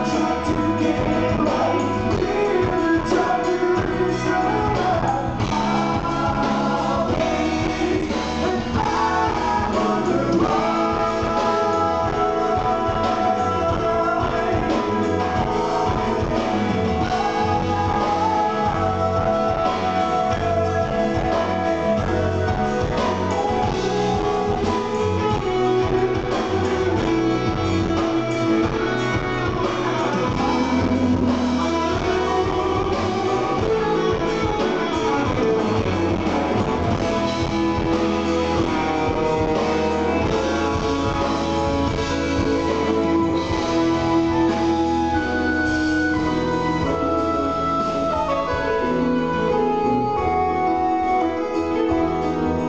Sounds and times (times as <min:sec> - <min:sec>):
Drum kit: 0:00.0 - 0:52.6
Progressive rock: 0:00.0 - 0:52.6.